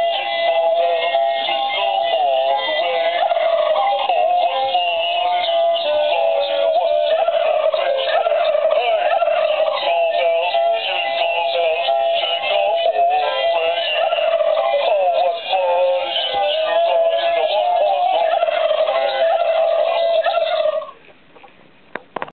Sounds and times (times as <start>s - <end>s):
Gobble: 3.0s - 4.4s, 6.4s - 10.0s, 13.7s - 15.3s, 16.1s - 21.5s.